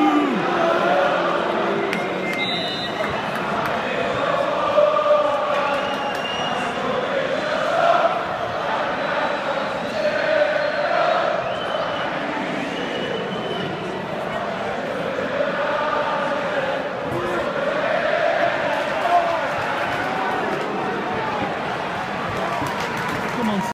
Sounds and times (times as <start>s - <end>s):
Speech: 23.3s - 23.7s.